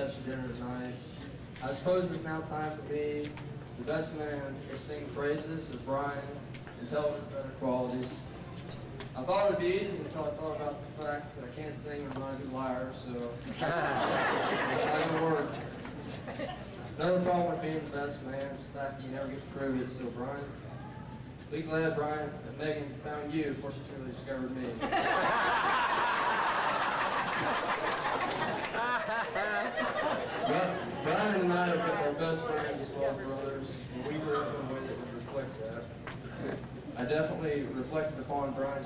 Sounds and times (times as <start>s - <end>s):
Male speech, man speaking: 0.0s - 8.2s, 9.2s - 13.4s, 14.7s - 15.6s, 17.0s - 20.6s, 21.5s - 24.8s, 30.4s - 35.9s, 37.0s - 38.8s
Narration, monologue: 0.0s - 25.5s, 28.0s - 38.8s.